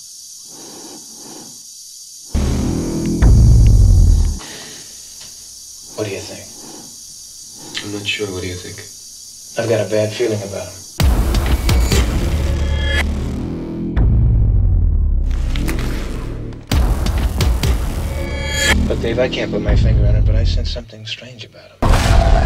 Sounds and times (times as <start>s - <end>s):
Music: 2.4s - 4.4s, 11.0s - 20.8s
Speech: 6.0s - 6.5s, 7.8s - 8.9s, 9.6s - 10.8s, 18.9s - 21.8s.